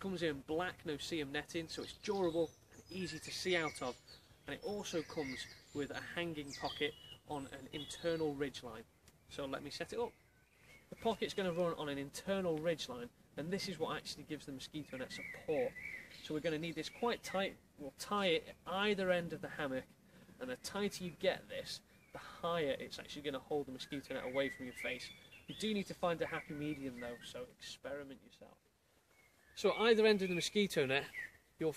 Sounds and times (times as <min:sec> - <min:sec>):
Speech: 0:00.0 - 0:10.1, 0:10.9 - 0:28.6, 0:29.6 - 0:31.7.